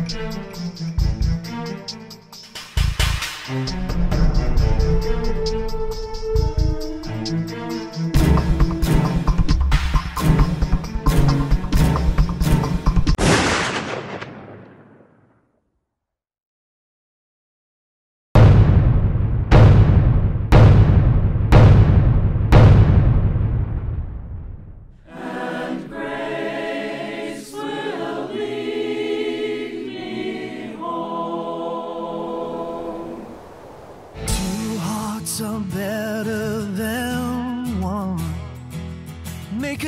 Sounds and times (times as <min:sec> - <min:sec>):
Choir: 0:25.0 - 0:35.1.